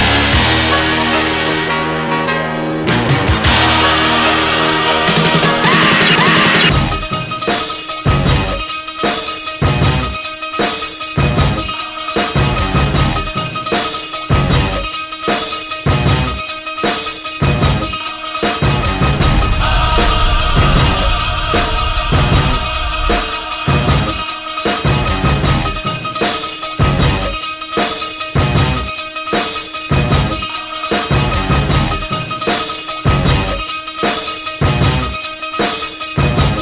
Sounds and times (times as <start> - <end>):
Music: 0.0 - 36.6.